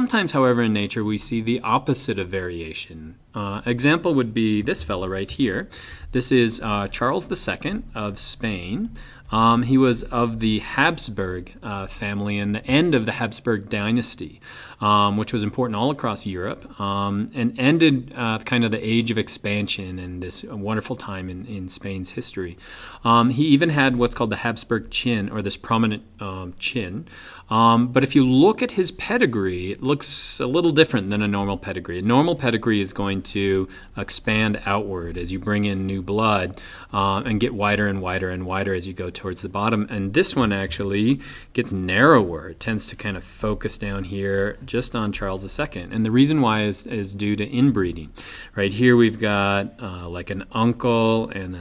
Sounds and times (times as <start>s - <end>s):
Speech: 0.0s - 51.6s.